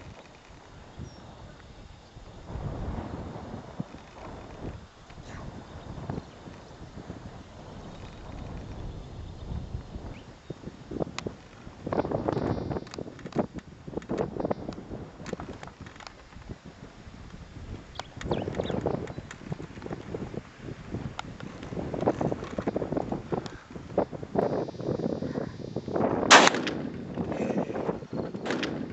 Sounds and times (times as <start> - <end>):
Outside, rural or natural: 0.0 - 28.9.